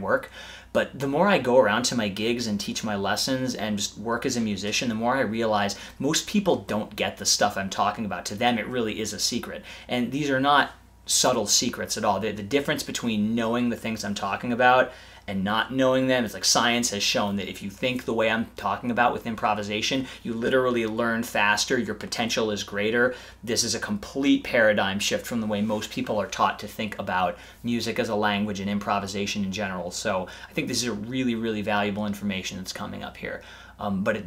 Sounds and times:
Speech: 0.0 - 34.2.

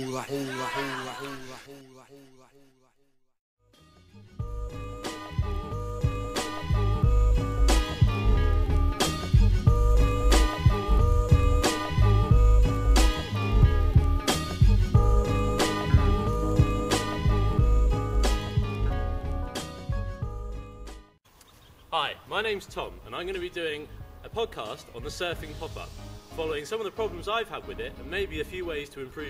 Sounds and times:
Music: 3.6 - 21.2, 22.6 - 29.2.

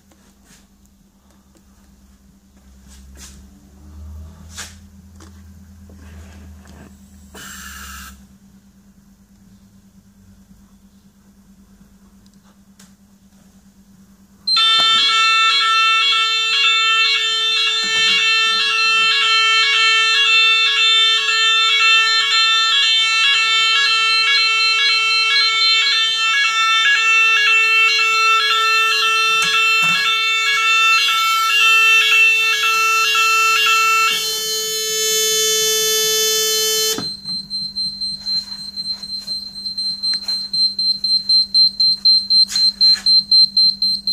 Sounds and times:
Fire alarm: 7.4 - 8.2, 14.5 - 44.1
Smoke detector, smoke alarm: 14.5 - 44.1.

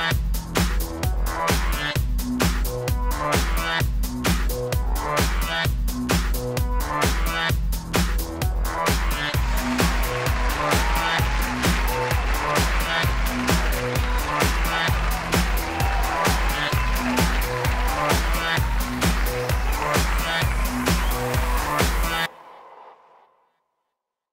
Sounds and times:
Music: 0.0 - 22.3.

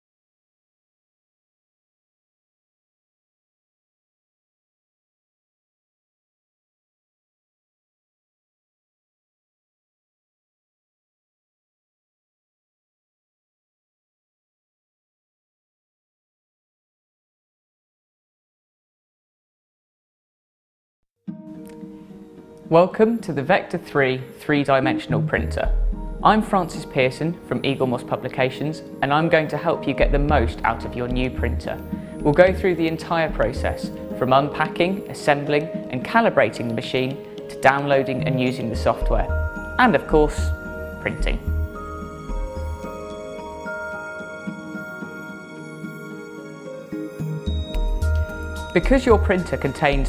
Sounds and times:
Music: 21.2 - 50.0
Speech: 22.7 - 41.4, 48.8 - 50.0.

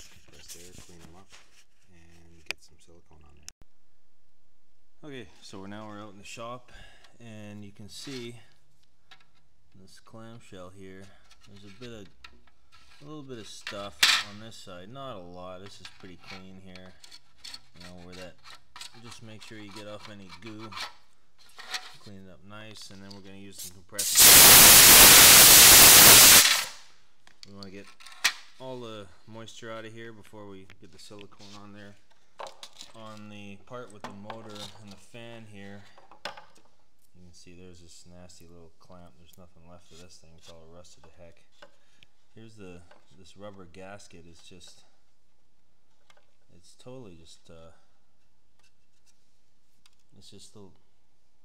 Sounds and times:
Speech: 0.0 - 3.5, 5.0 - 8.6, 9.8 - 12.2, 13.0 - 17.0, 17.8 - 20.8, 22.0 - 24.1, 27.5 - 28.0, 28.6 - 32.0, 32.9 - 36.0, 37.2 - 41.5, 42.4 - 45.0, 46.5 - 47.9, 50.1 - 50.8
Inside, small room: 0.0 - 51.4.

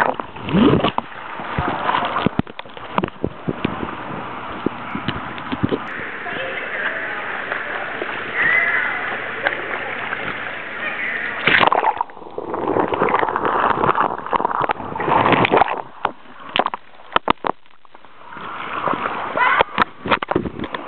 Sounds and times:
Rowboat, canoe, kayak: 0.0 - 20.8.

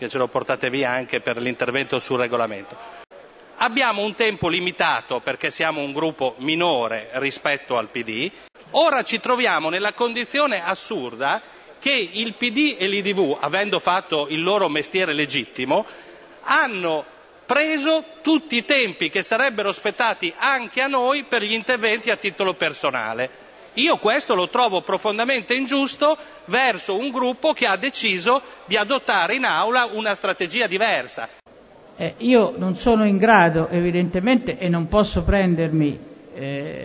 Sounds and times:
Speech: 3.6 - 31.3.

